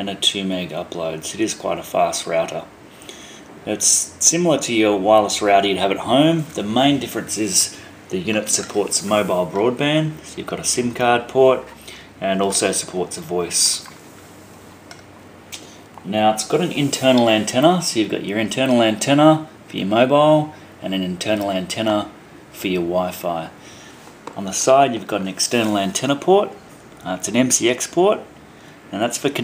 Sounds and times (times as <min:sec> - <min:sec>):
Speech: 0:00.0 - 0:02.7, 0:03.6 - 0:13.9, 0:16.0 - 0:23.6, 0:24.4 - 0:28.3, 0:28.9 - 0:29.4.